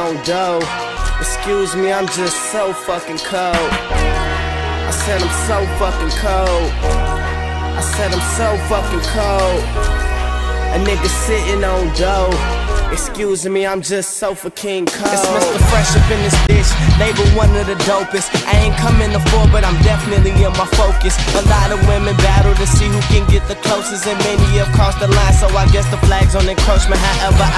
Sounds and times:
Music: 0.0 - 27.5.

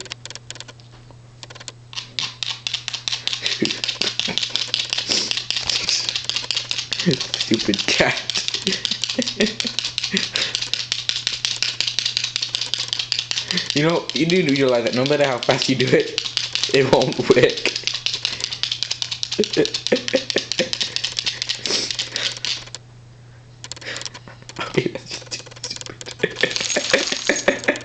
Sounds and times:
Speech: 13.8 - 17.6.

